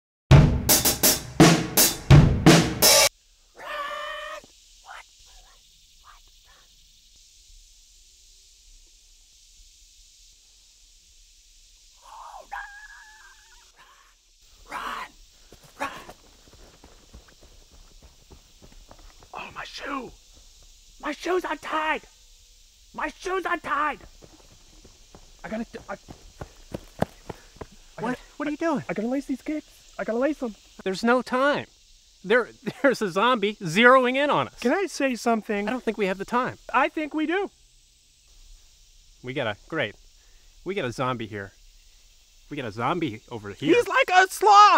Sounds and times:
Bass drum: 0.3s - 3.1s.

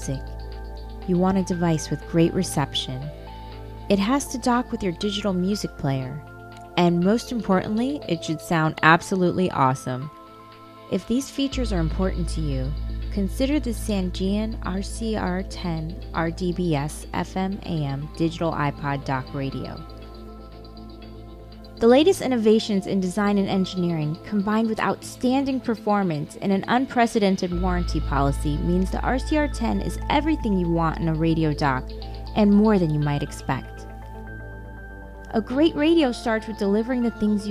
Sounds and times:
Speech: 0.0s - 0.2s, 1.1s - 3.1s, 3.9s - 6.2s, 6.8s - 10.1s, 10.9s - 19.8s, 21.8s - 33.8s, 35.3s - 37.5s
Music: 0.0s - 37.5s.

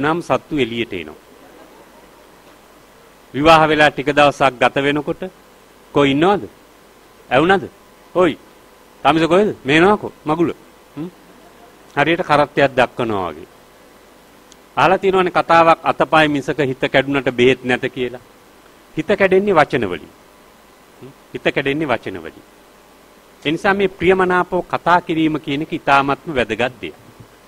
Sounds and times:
Male speech, man speaking: 0.0s - 1.2s, 3.4s - 5.4s, 6.0s - 6.6s, 7.3s - 8.4s, 9.0s - 11.2s, 12.0s - 13.5s, 14.8s - 18.2s, 19.0s - 20.1s, 21.0s - 22.4s, 23.4s - 27.0s
Narration, monologue: 0.0s - 1.9s, 2.5s - 27.4s.

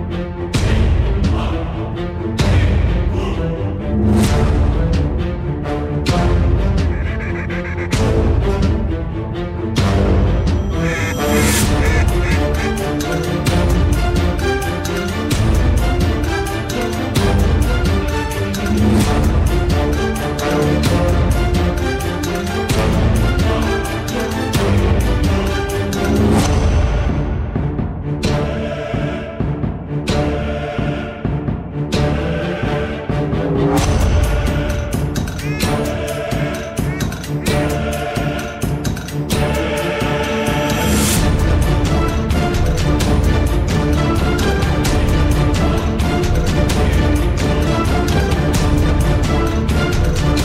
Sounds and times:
Music: 0.0s - 50.4s.

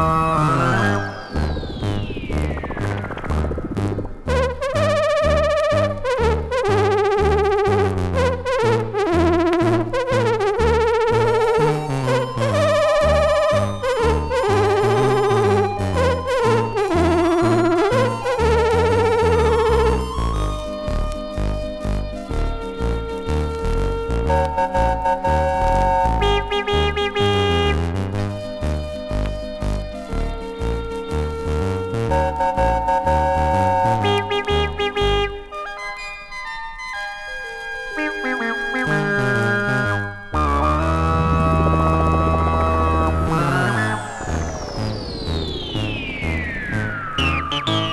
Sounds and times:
Electronica: 0.0s - 47.9s.

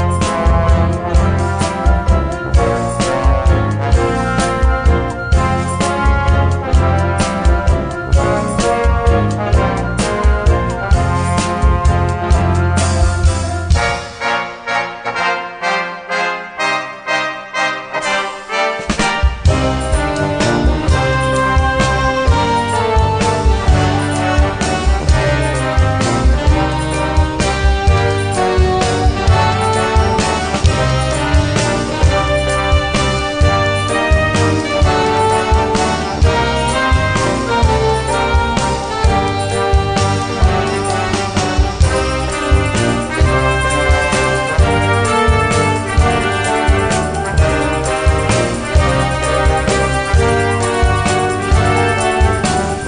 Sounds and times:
Orchestra: 0.0s - 52.8s.

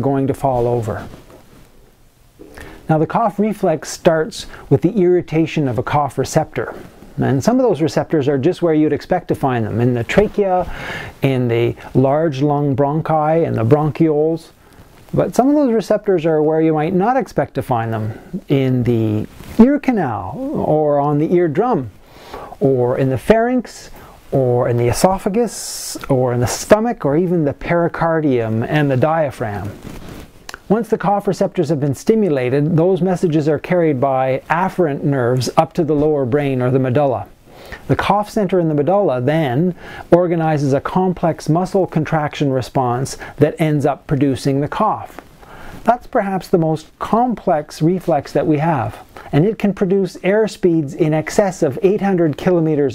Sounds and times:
Speech: 0.0s - 1.2s, 2.9s - 22.0s, 22.6s - 29.8s, 30.5s - 45.2s, 45.8s - 52.9s.

